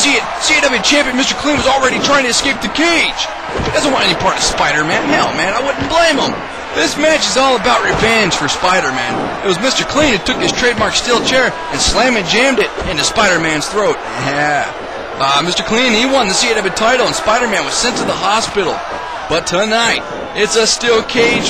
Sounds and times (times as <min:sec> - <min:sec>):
Speech: 0:00.0 - 0:21.4.